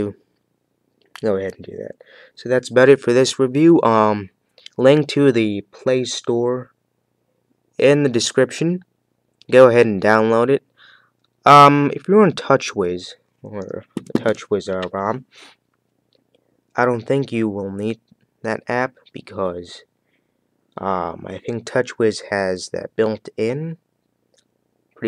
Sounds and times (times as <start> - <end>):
Speech: 0.0 - 0.2, 1.2 - 6.8, 7.8 - 10.7, 11.4 - 15.5, 16.8 - 19.9, 20.8 - 23.8.